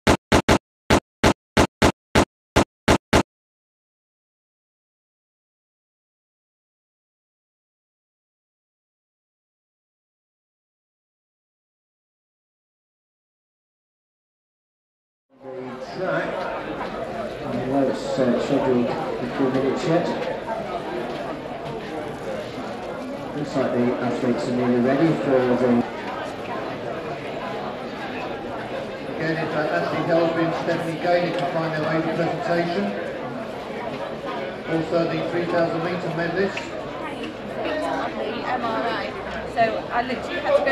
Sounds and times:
Speech: 15.4s - 40.7s.

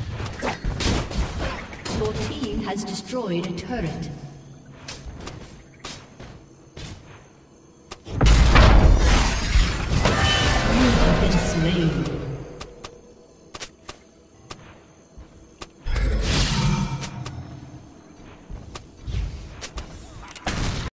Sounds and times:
Speech: 1.9s - 4.3s, 10.6s - 12.4s.

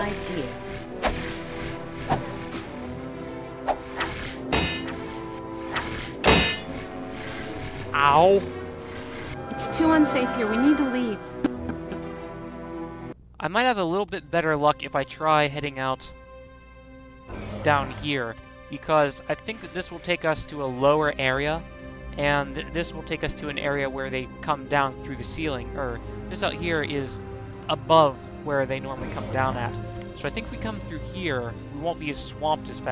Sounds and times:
Speech: 0.0s - 0.6s, 8.0s - 8.5s, 13.4s - 16.2s, 17.6s - 21.6s, 22.2s - 32.9s
Music: 0.0s - 32.9s.

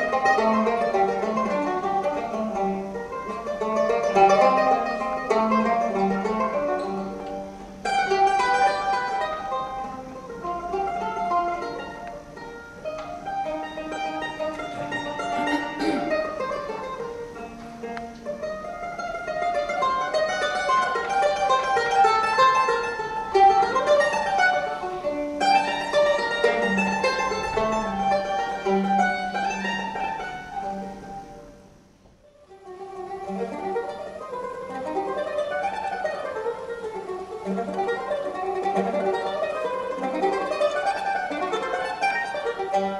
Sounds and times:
Mandolin: 0.0s - 42.9s
Pizzicato: 0.0s - 42.9s.

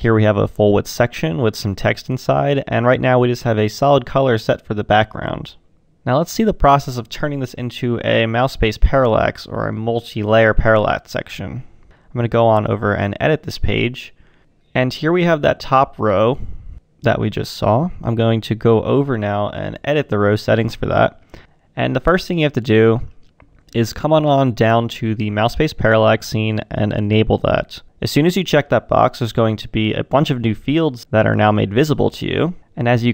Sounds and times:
Speech: 0.0s - 21.2s, 21.8s - 33.1s.

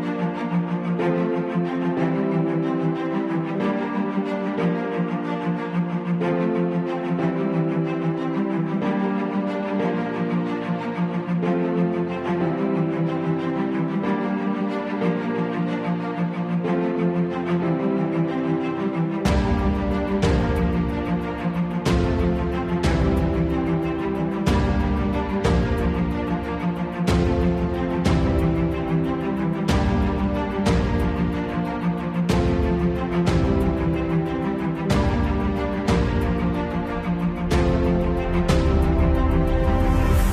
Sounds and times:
Music: 0.0s - 40.3s.

